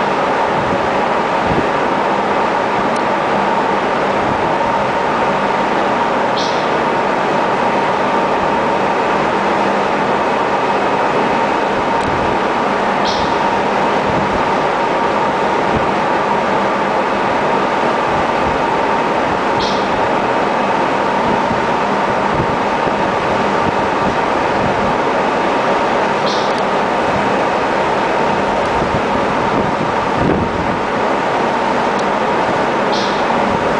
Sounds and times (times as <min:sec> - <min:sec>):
Wind noise (microphone): 0:00.5 - 0:01.8, 0:04.2 - 0:04.7, 0:14.0 - 0:14.5, 0:21.2 - 0:25.0, 0:28.3 - 0:30.9.